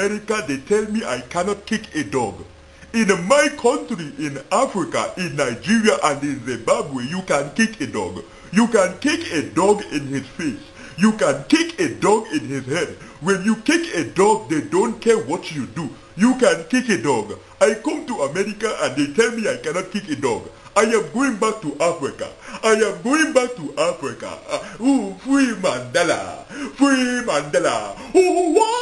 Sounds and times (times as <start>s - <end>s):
Speech: 0.0s - 28.8s.